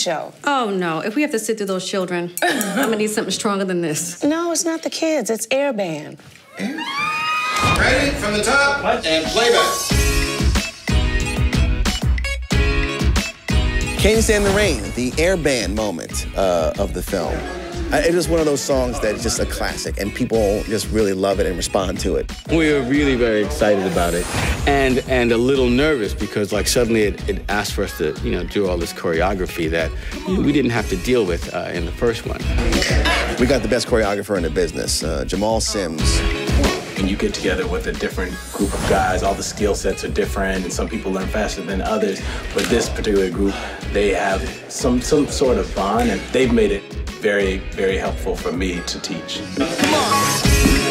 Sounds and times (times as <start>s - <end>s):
Music: 7.5s - 50.9s.